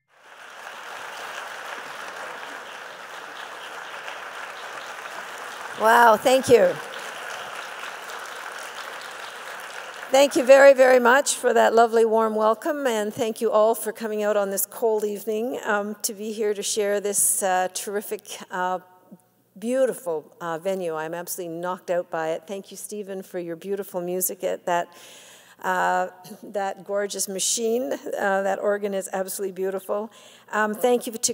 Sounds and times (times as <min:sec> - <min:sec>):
Speech: 0:05.8 - 0:06.8, 0:10.1 - 0:18.8, 0:19.6 - 0:24.9, 0:25.7 - 0:31.3.